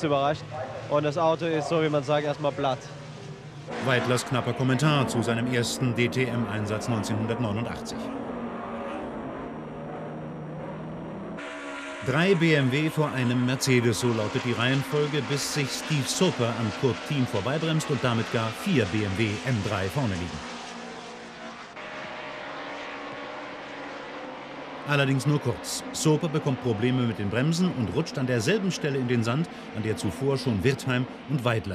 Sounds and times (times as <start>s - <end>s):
Speech: 0.0s - 3.0s, 3.8s - 8.0s, 12.1s - 20.4s, 24.9s - 31.7s
Car passing by: 11.4s - 31.7s.